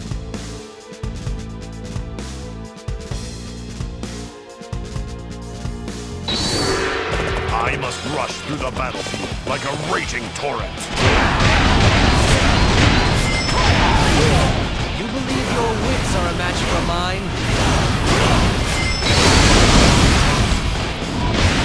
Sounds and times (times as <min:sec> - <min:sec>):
Music: 0:00.0 - 0:21.6
Speech: 0:07.5 - 0:10.9, 0:14.1 - 0:17.3.